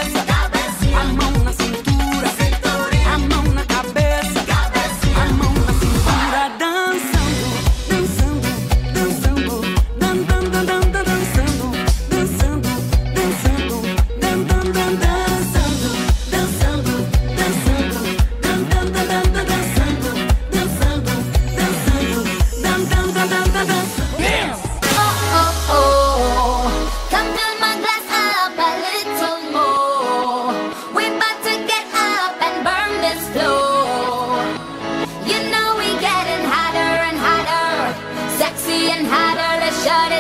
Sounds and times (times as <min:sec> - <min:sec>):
Music: 0:00.0 - 0:40.2.